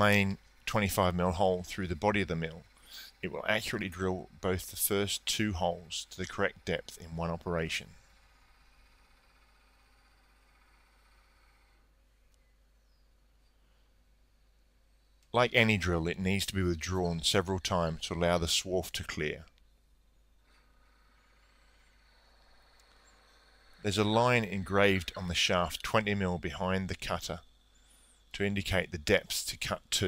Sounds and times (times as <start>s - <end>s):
Speech: 0.0s - 8.0s, 15.4s - 19.5s, 23.9s - 27.4s, 28.4s - 30.0s.